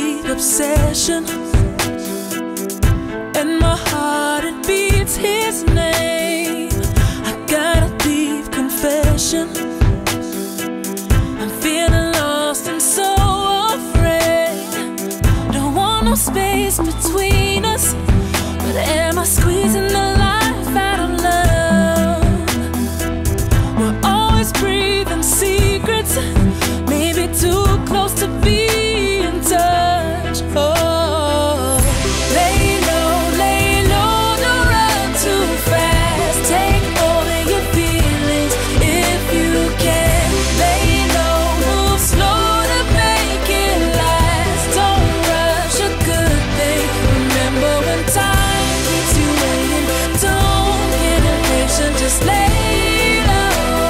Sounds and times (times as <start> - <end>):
Music: 0.0 - 53.9.